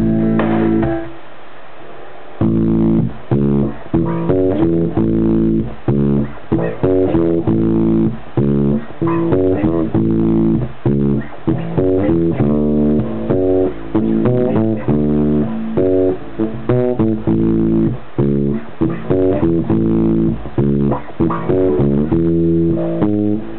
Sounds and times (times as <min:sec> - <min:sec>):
Blues: 0:00.0 - 0:01.2, 0:02.4 - 0:23.5
Bass guitar: 0:00.0 - 0:01.3, 0:02.4 - 0:23.5.